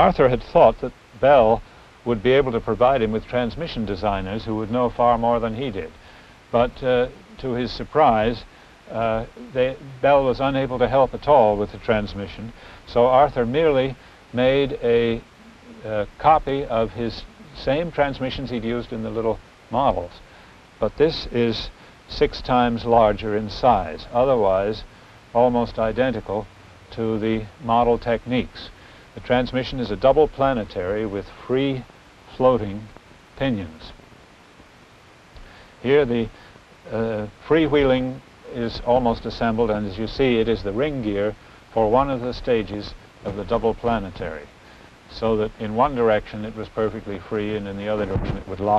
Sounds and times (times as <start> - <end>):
Speech: 0.0 - 34.0, 35.8 - 44.5, 45.1 - 48.7.